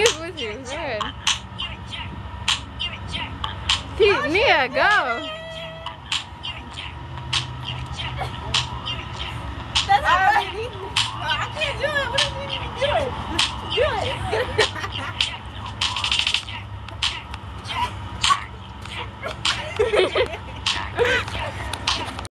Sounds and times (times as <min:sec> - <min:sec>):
Music: 0:15.2 - 0:19.6.